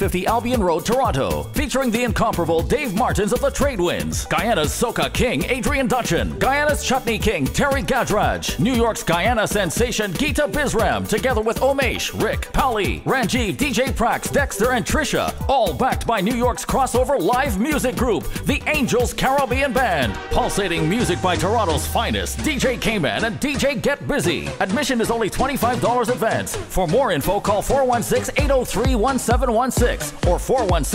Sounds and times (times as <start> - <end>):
Music: 0.0 - 30.9
Speech: 0.0 - 30.9.